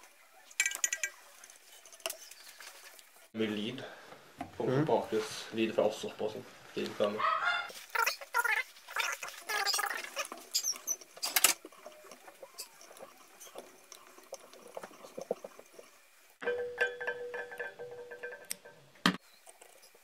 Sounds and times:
Speech: 3.4s - 3.9s, 4.6s - 7.3s.

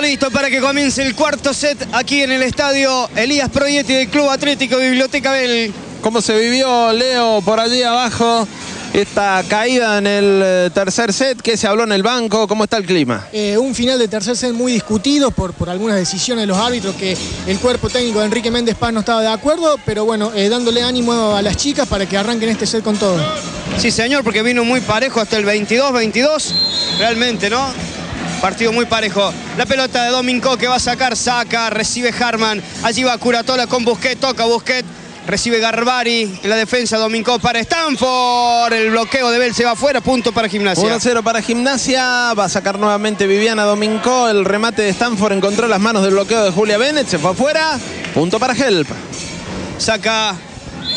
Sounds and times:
Speech: 0.0s - 27.8s, 28.4s - 49.0s.

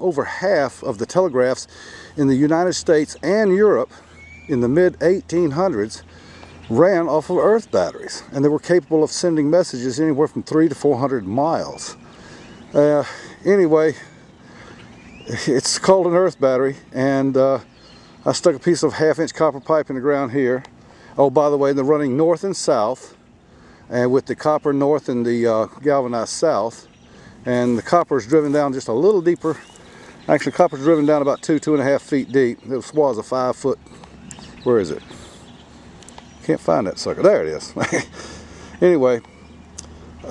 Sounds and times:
Speech: 0.0s - 3.9s, 4.5s - 6.0s, 6.7s - 12.0s, 12.8s - 14.1s, 15.3s - 23.2s, 23.9s - 26.9s, 27.5s - 29.7s, 30.3s - 33.8s, 34.6s - 35.2s, 36.4s - 38.0s, 38.8s - 39.2s
Outside, rural or natural: 0.0s - 40.3s.

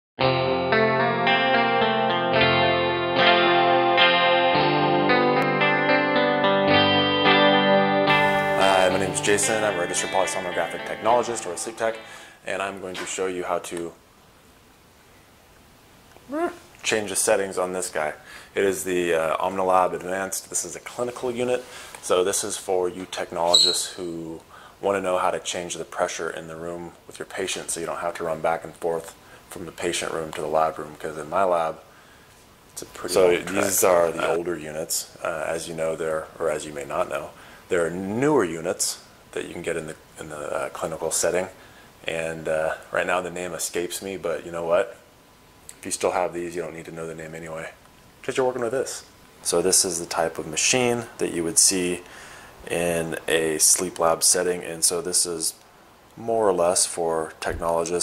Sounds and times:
Music: 0.2s - 12.2s
Distortion: 0.2s - 52.1s
Speech: 8.6s - 14.0s, 16.3s - 31.8s, 32.8s - 45.0s, 45.7s - 52.1s, 52.7s - 55.6s, 56.2s - 58.0s.

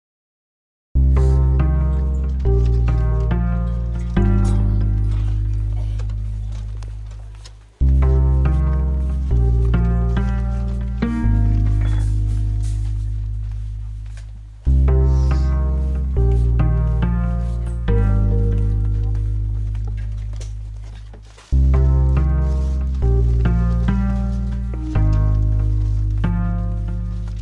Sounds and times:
Music: 1.0s - 27.4s.

